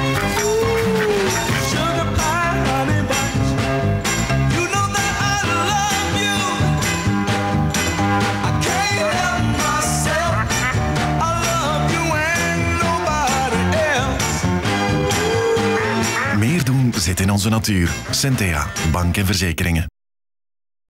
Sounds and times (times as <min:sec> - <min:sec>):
Music: 0:00.0 - 0:19.9
Quack: 0:15.6 - 0:16.4
Speech: 0:16.2 - 0:19.9.